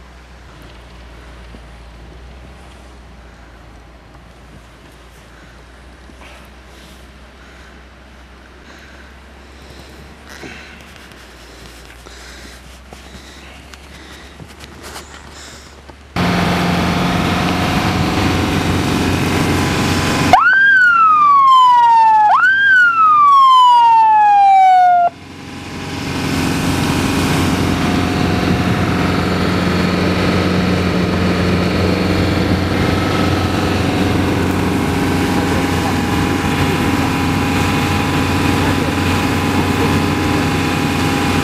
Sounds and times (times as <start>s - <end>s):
Car: 0.0s - 41.4s
Ambulance (siren): 20.2s - 25.2s.